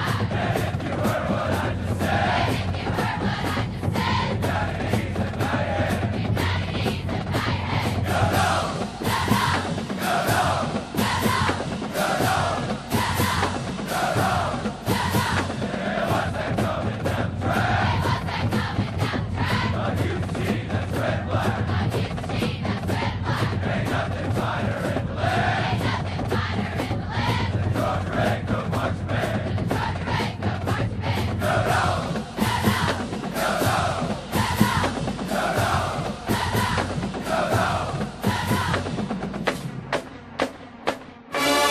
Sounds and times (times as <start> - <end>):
Music: 0.0 - 41.7.